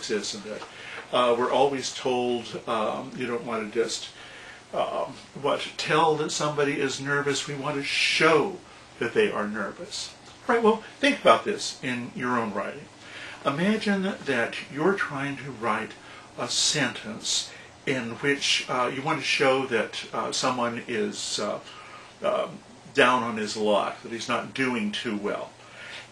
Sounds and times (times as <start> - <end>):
Speech: 0.0 - 25.6.